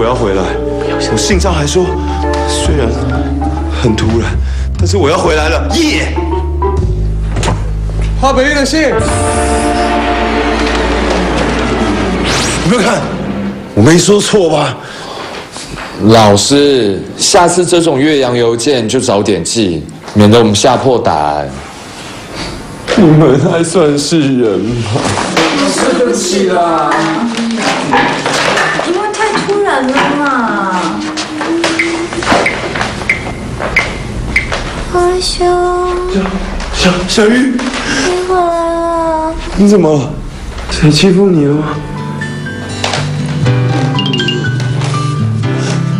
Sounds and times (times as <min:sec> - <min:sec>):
Inside, large room or hall: 0:06.2 - 0:45.9.